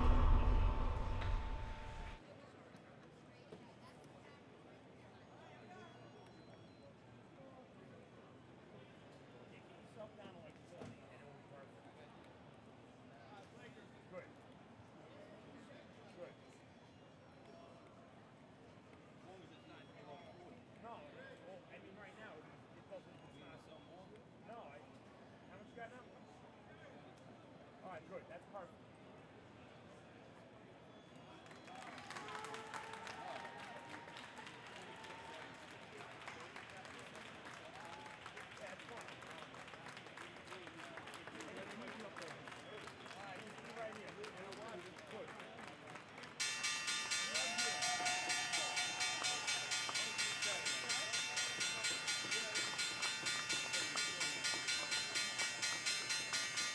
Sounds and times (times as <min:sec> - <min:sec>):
Speech: 0:00.0 - 0:18.3, 0:19.1 - 0:46.4, 0:47.1 - 0:56.7.